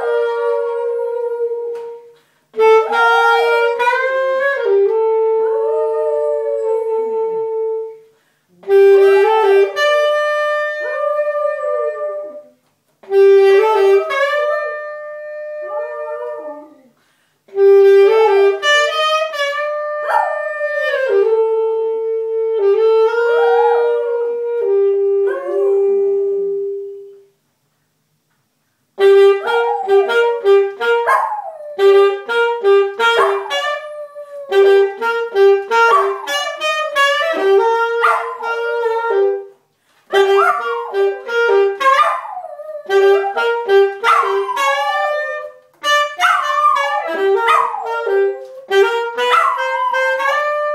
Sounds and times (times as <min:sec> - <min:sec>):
Music: 0:00.0 - 0:05.6, 0:07.1 - 0:11.0, 0:13.0 - 0:15.6, 0:17.6 - 0:25.6, 0:29.0 - 0:31.1, 0:31.8 - 0:33.8, 0:34.5 - 0:42.0, 0:42.9 - 0:50.7.